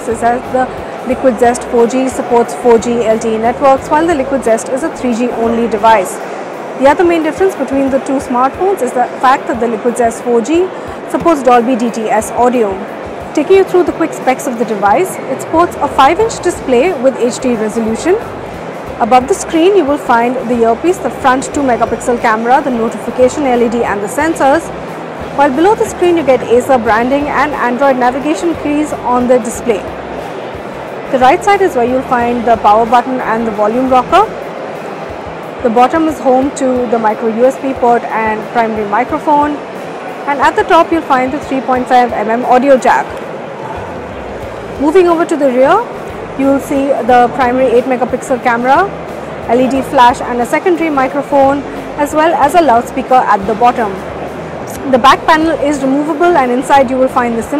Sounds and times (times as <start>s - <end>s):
Speech: 0.0s - 6.2s, 6.8s - 12.8s, 13.4s - 18.3s, 19.0s - 24.7s, 25.4s - 29.9s, 31.2s - 34.3s, 35.7s - 39.6s, 40.3s - 43.1s, 44.8s - 48.9s, 49.5s - 54.0s, 54.7s - 57.5s.